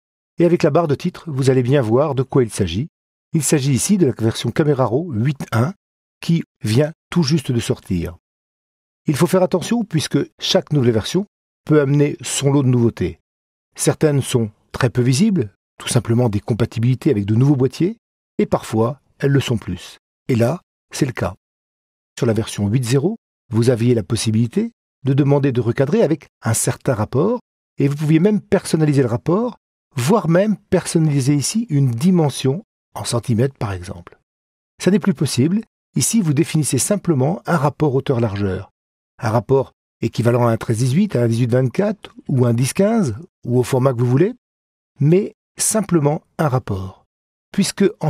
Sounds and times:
Speech: 0:00.4 - 0:08.2, 0:09.1 - 0:13.2, 0:13.8 - 0:21.4, 0:22.2 - 0:34.2, 0:34.8 - 0:44.4, 0:45.0 - 0:48.0.

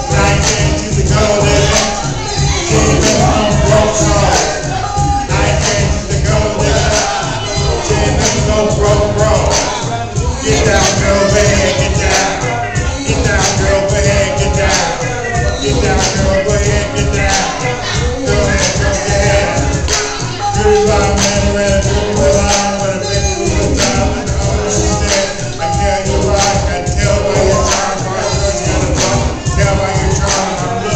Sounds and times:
Male singing: 0:00.0 - 0:30.9
Music: 0:00.0 - 0:30.9.

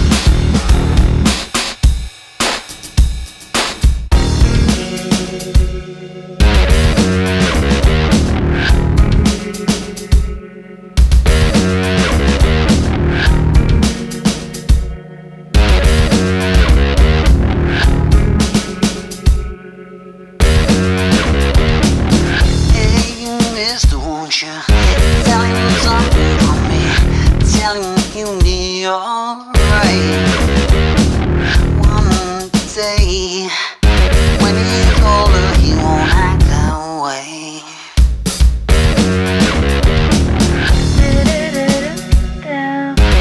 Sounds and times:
Music: 0:00.0 - 0:37.2, 0:37.9 - 0:43.2.

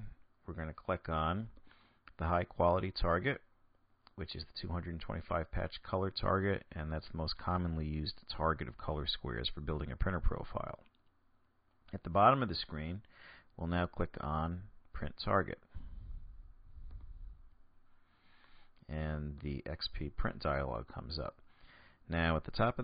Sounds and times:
Speech: 0:00.0 - 0:03.5, 0:04.1 - 0:10.9, 0:11.9 - 0:15.7, 0:18.9 - 0:21.4, 0:22.1 - 0:22.8.

